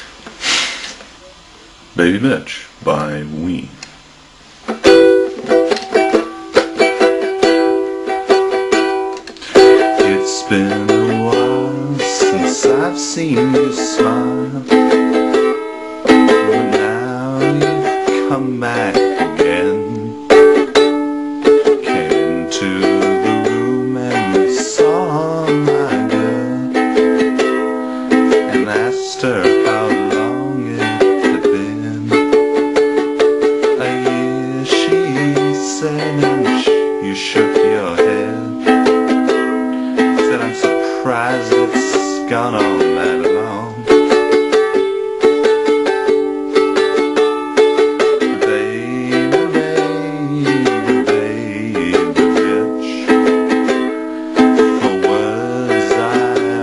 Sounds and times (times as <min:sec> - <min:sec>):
Inside, small room: 0:00.0 - 0:56.6
Guitar: 0:04.6 - 0:56.6
Ukulele: 0:04.6 - 0:56.6.